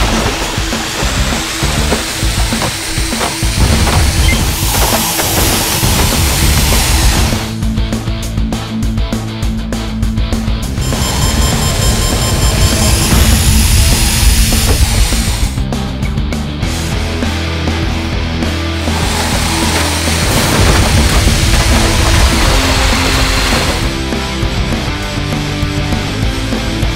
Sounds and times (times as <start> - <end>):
Music: 0.0 - 26.9.